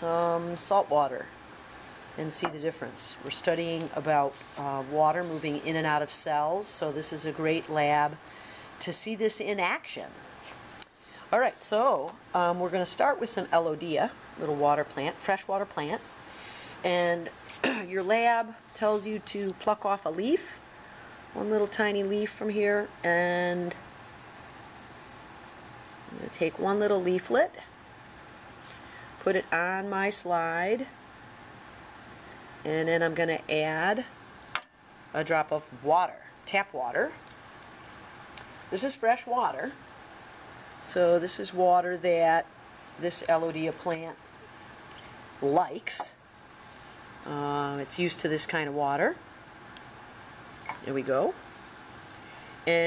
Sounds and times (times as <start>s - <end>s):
Speech: 0.0s - 1.3s, 2.2s - 8.2s, 8.8s - 10.2s, 11.3s - 16.0s, 16.9s - 20.6s, 21.4s - 23.8s, 26.1s - 27.7s, 29.2s - 31.0s, 32.7s - 34.1s, 35.2s - 37.2s, 38.8s - 39.8s, 40.8s - 44.2s, 45.4s - 46.2s, 47.2s - 49.2s, 50.7s - 51.4s.